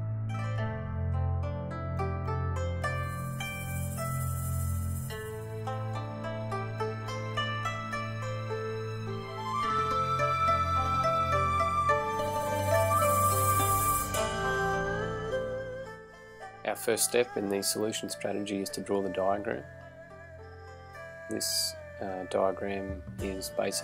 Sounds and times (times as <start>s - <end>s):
Music: 0.0s - 23.8s
Speech: 16.7s - 19.7s, 21.3s - 23.8s.